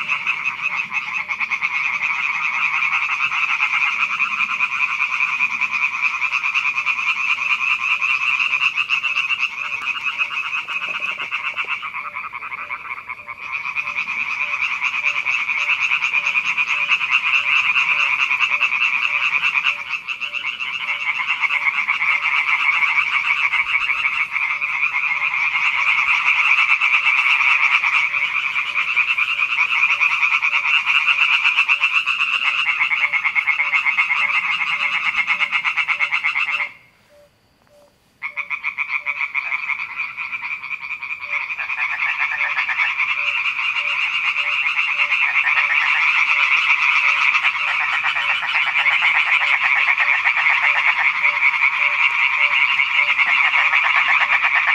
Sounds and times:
Croak: 0.0s - 54.7s.

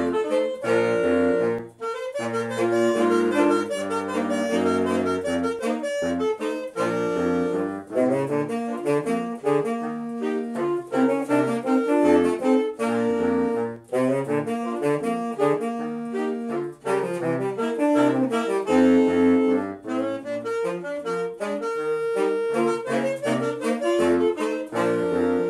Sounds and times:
Music: 0.0s - 25.4s.

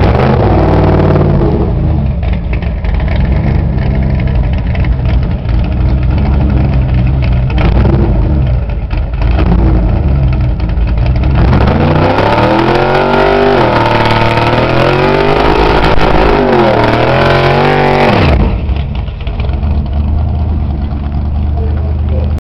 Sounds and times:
Accelerating, revving, vroom: 0.0s - 1.8s, 7.6s - 8.3s, 11.3s - 18.6s
Speech: 21.5s - 22.4s.

